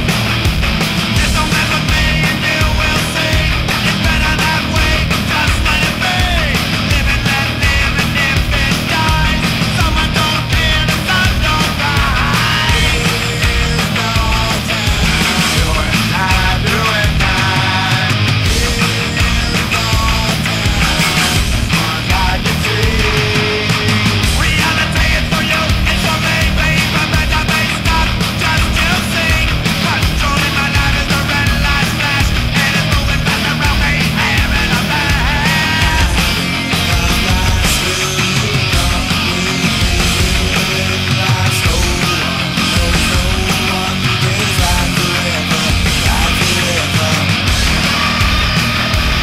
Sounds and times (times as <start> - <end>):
Music: 0.0 - 49.2.